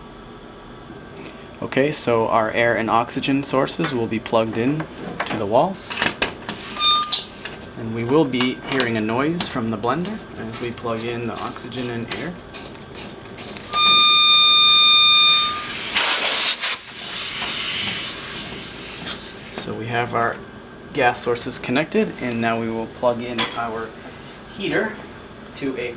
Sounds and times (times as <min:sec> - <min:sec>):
Steam: 0:15.6 - 0:19.6.